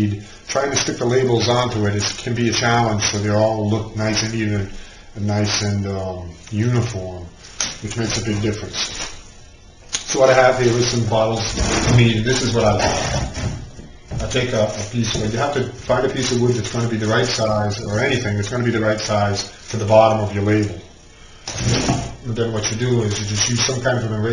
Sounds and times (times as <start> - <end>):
Speech: 0.0 - 9.2, 10.0 - 13.4, 14.1 - 20.9, 21.6 - 24.3
Inside, small room: 0.0 - 24.3.